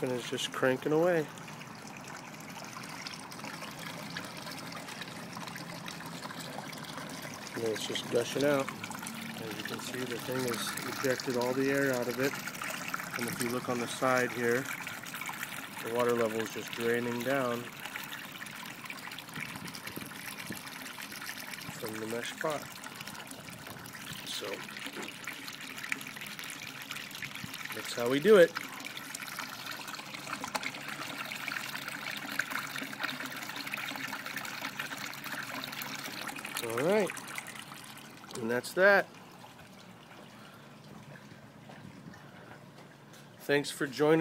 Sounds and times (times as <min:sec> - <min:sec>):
Speech: 0:00.0 - 0:01.3, 0:07.6 - 0:08.7, 0:09.4 - 0:12.4, 0:13.2 - 0:14.7, 0:15.8 - 0:17.7, 0:21.7 - 0:22.7, 0:24.2 - 0:24.7, 0:27.8 - 0:28.6, 0:36.6 - 0:37.1, 0:38.4 - 0:39.1, 0:43.4 - 0:44.2
Water: 0:00.0 - 0:44.2.